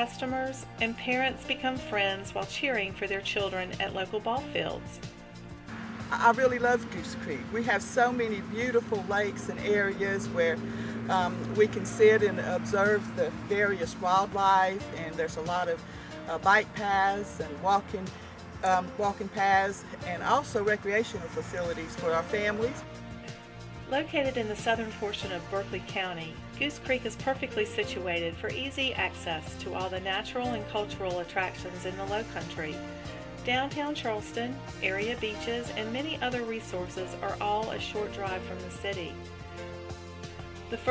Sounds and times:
Speech: 0.0 - 5.0, 6.1 - 22.8, 23.9 - 32.8, 33.4 - 39.2
Music: 0.0 - 40.9.

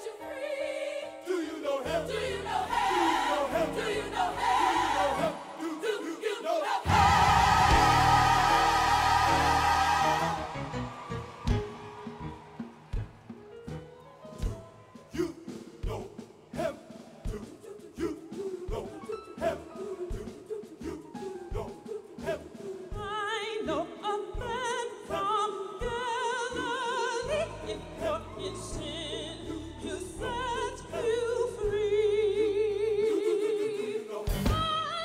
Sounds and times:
Music: 0.0 - 35.0.

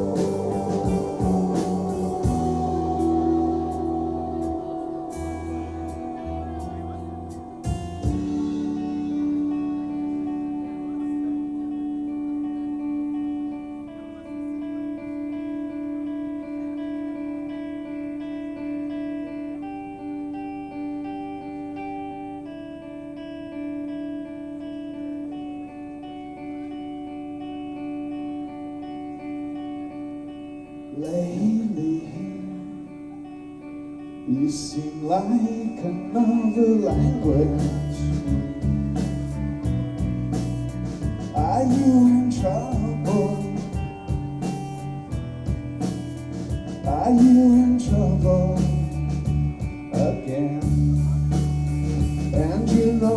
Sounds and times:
Guitar: 0.0 - 53.1.

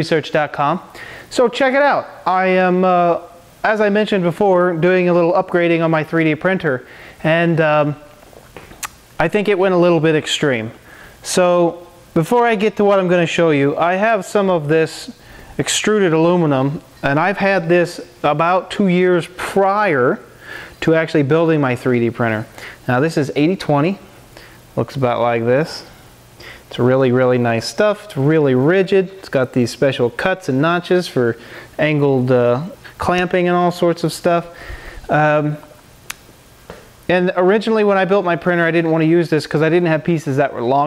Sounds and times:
Speech: 0.0 - 8.2, 9.2 - 24.1, 24.8 - 25.9, 26.7 - 35.8, 37.1 - 40.8.

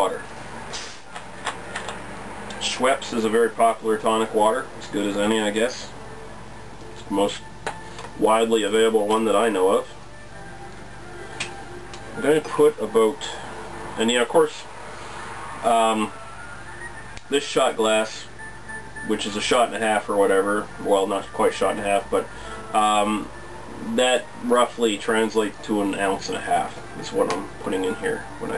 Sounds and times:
Speech: 0.0 - 0.3, 2.6 - 5.9, 7.0 - 7.4, 8.2 - 10.0, 12.2 - 13.4, 14.0 - 14.7, 15.6 - 16.1, 17.3 - 18.3, 19.1 - 28.5
Music: 3.0 - 14.5, 15.9 - 28.5.

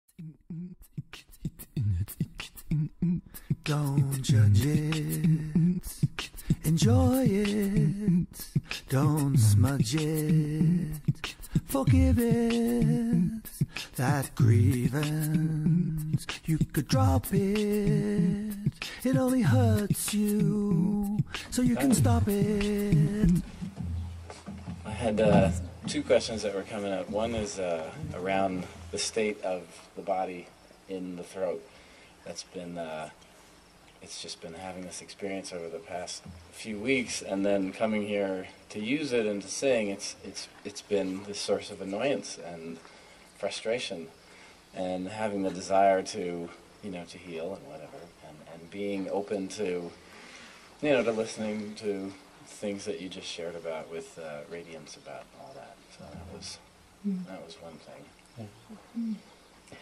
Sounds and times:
Singing: 0.1 - 23.9
Beatboxing: 0.1 - 26.0.

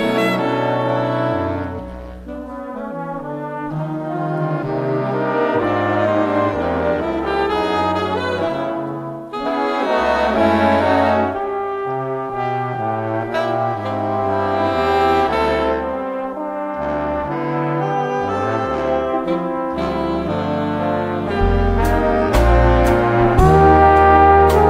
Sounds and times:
Trombone: 0.0 - 24.6.

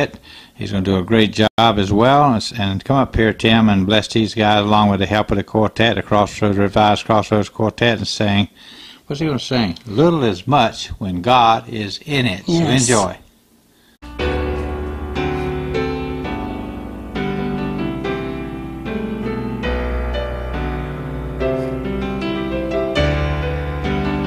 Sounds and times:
Speech: 0.0 - 8.5, 9.1 - 13.3
Music: 14.0 - 24.2.

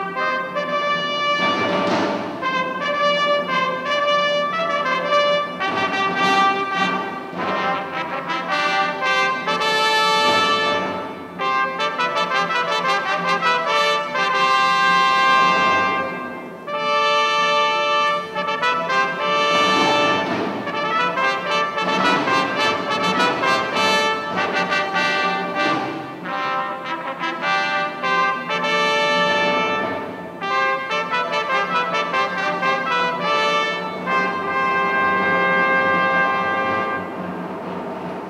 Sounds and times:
Brass instrument: 0.0 - 38.2.

